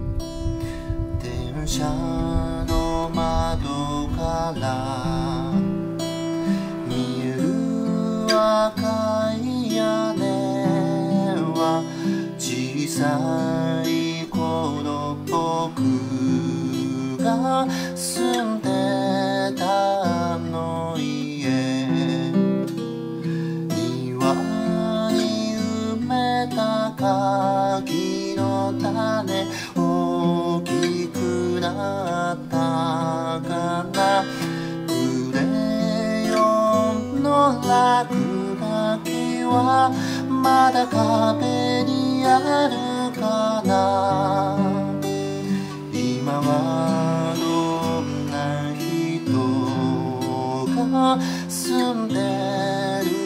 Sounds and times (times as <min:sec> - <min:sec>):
Acoustic guitar: 0:00.0 - 0:53.2.